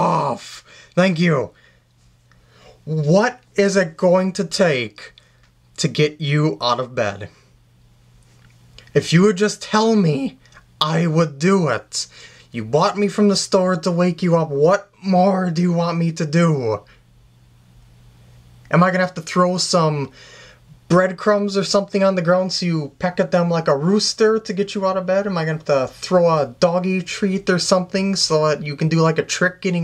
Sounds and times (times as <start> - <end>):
Speech: 0.0 - 1.6, 2.8 - 5.2, 5.8 - 7.4, 8.9 - 16.9, 18.7 - 20.2, 20.8 - 29.8.